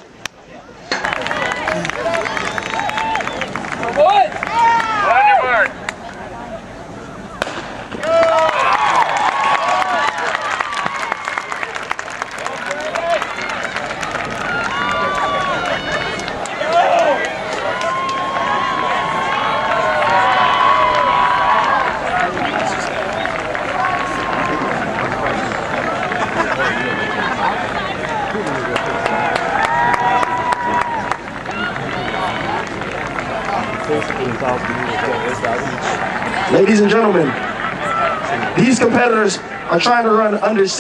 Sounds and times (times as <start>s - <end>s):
Outside, urban or manmade: 0.0s - 40.8s.